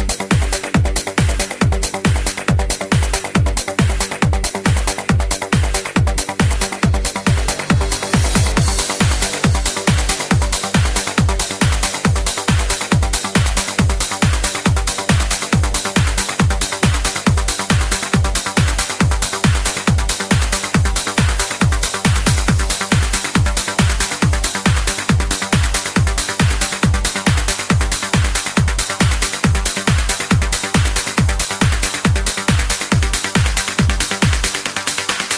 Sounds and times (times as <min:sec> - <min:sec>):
House music: 0:00.0 - 0:35.3.